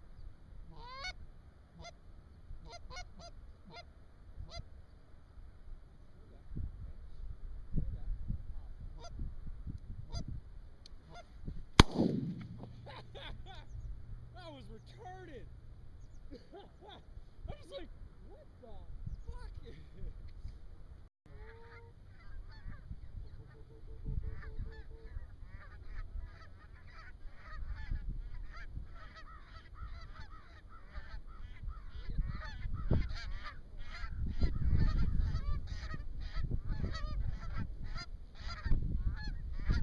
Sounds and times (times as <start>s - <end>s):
Honk: 0.7s - 1.2s, 1.8s - 2.0s, 2.6s - 4.7s, 9.0s - 9.2s, 11.0s - 11.4s, 21.3s - 39.8s.